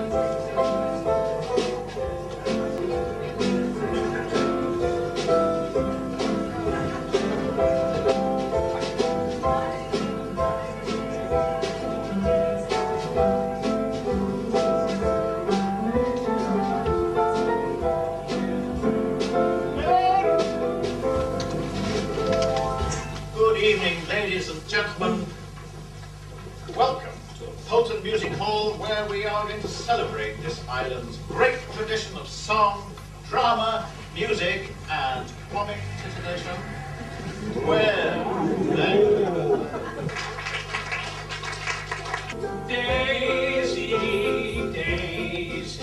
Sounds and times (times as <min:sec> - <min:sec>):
Speech: 0:23.4 - 0:25.4, 0:26.7 - 0:36.6, 0:37.6 - 0:39.7.